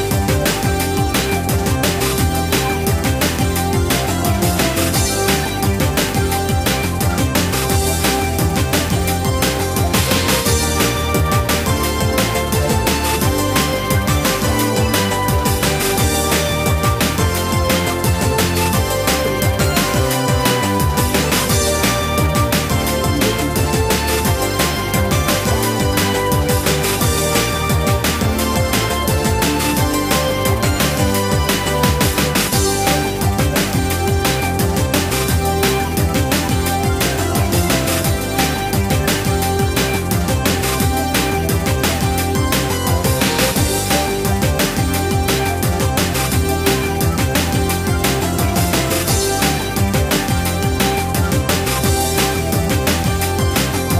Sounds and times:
Music: 0.0s - 53.9s.

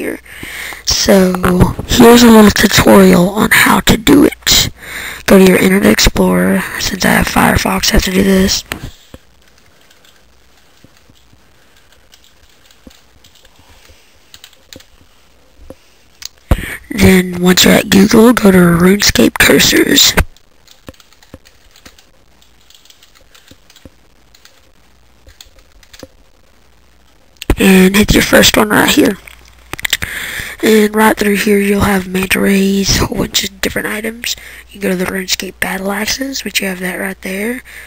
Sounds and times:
Speech: 0.0s - 8.9s, 16.6s - 20.3s, 27.4s - 29.2s, 30.6s - 37.7s.

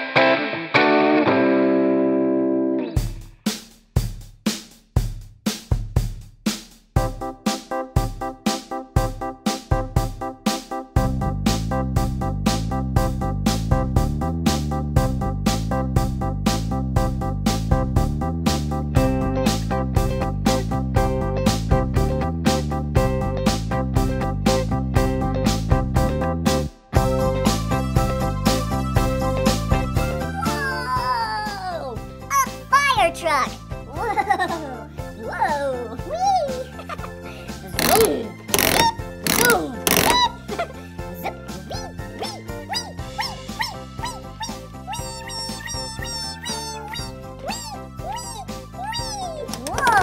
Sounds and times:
Music for children: 7.0s - 18.2s, 25.5s - 50.0s
Child speech, kid speaking: 30.3s - 34.1s, 35.2s - 36.8s, 37.8s - 38.3s, 39.4s - 39.8s, 41.2s - 42.4s, 45.9s - 50.0s.

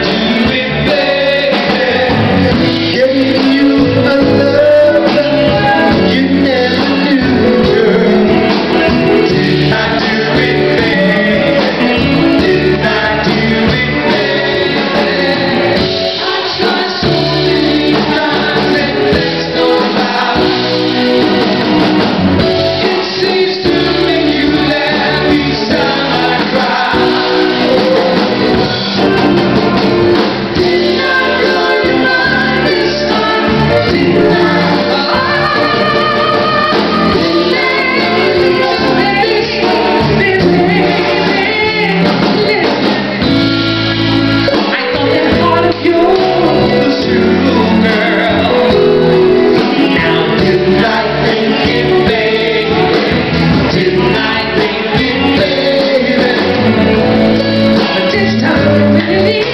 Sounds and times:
Male singing: 0.0s - 20.6s, 22.6s - 28.3s, 29.0s - 43.2s, 44.4s - 59.5s
Choir: 0.0s - 43.1s, 44.1s - 59.5s.

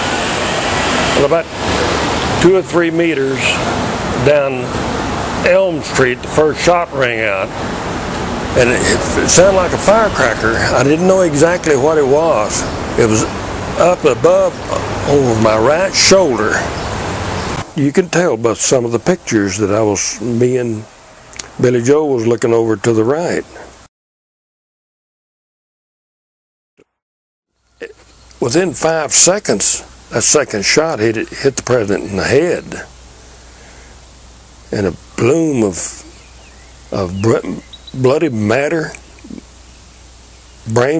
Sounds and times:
Speech: 1.2s - 1.5s, 2.4s - 3.6s, 4.2s - 4.7s, 5.4s - 7.5s, 8.6s - 16.7s, 17.8s - 23.6s, 27.8s - 32.9s, 34.7s - 36.1s, 36.9s - 39.4s, 40.7s - 40.9s.

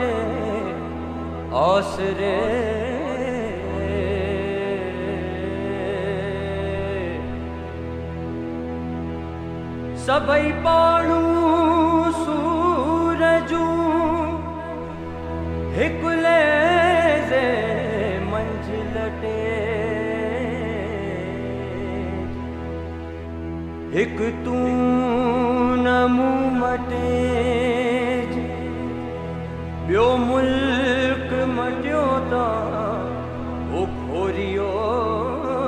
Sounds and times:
Music: 0.0s - 35.6s.

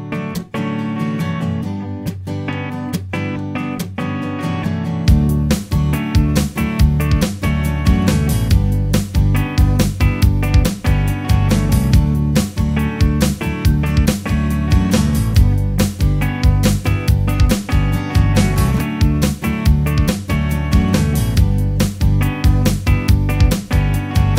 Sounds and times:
Music: 0.0s - 24.3s.

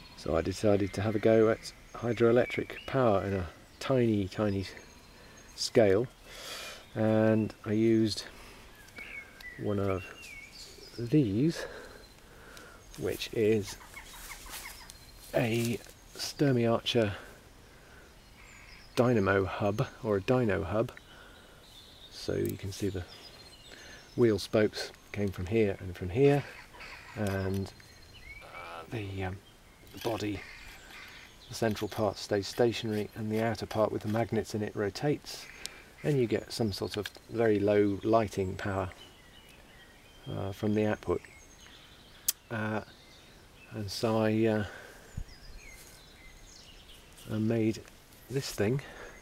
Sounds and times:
Speech: 0.2s - 4.8s, 5.6s - 6.1s, 7.0s - 8.3s, 9.6s - 10.2s, 11.0s - 11.8s, 13.0s - 13.8s, 15.3s - 17.3s, 19.0s - 21.0s, 22.2s - 23.1s, 24.2s - 26.6s, 27.2s - 27.8s, 28.9s - 29.4s, 30.0s - 30.5s, 31.5s - 39.0s, 40.3s - 41.3s, 42.5s - 42.9s, 43.7s - 44.8s, 47.3s - 49.1s.

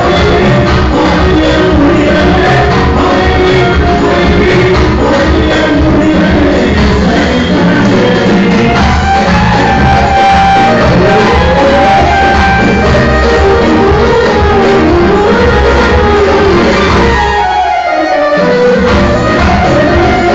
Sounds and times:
Dance music: 0.0s - 20.3s.

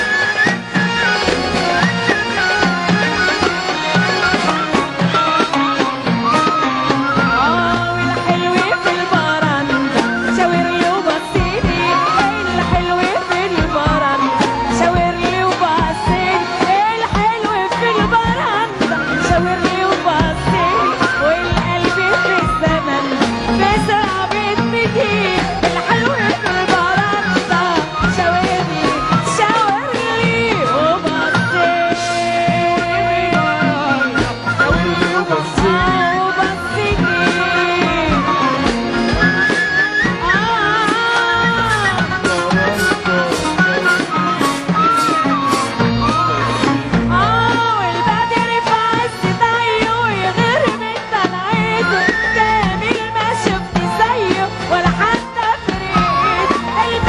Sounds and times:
Middle Eastern music: 0.0s - 57.0s.

